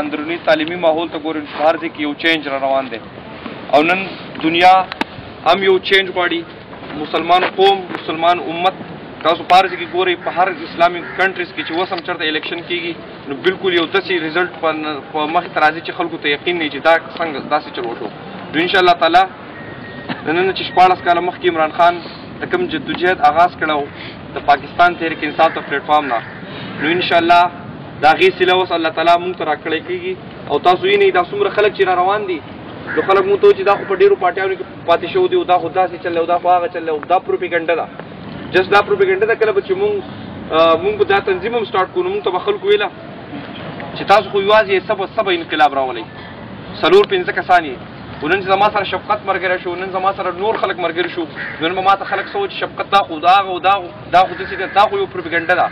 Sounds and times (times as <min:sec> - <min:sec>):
Male speech, man speaking: 0:00.0 - 0:03.1, 0:03.7 - 0:19.4, 0:20.2 - 0:37.9, 0:38.5 - 0:43.0, 0:44.0 - 0:46.1, 0:46.8 - 0:55.7
Narration, monologue: 0:00.0 - 0:55.7.